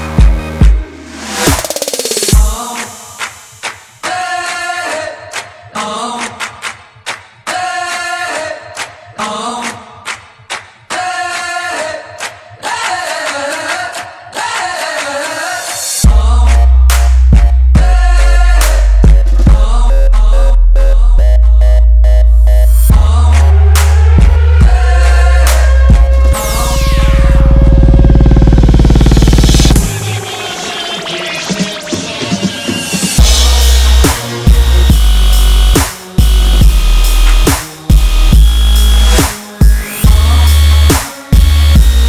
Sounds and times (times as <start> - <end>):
Music: 0.0 - 42.0.